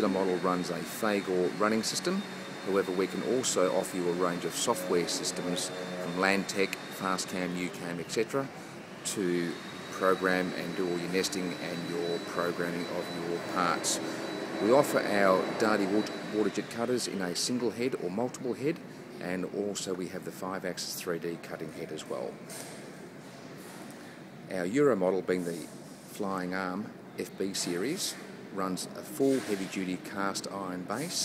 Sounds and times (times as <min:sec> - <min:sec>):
Speech: 0:00.0 - 0:22.4, 0:24.5 - 0:31.2.